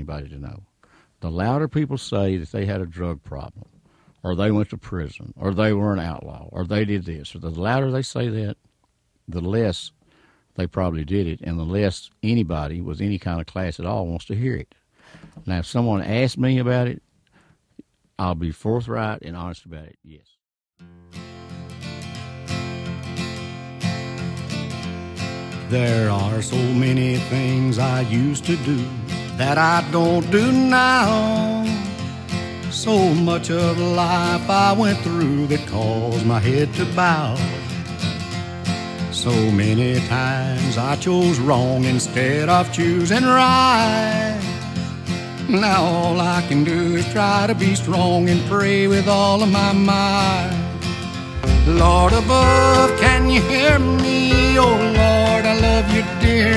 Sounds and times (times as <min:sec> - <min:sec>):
Speech: 0:00.0 - 0:08.6, 0:09.3 - 0:10.0, 0:10.6 - 0:14.8, 0:15.4 - 0:17.0, 0:18.2 - 0:20.4
Country: 0:21.0 - 0:56.5.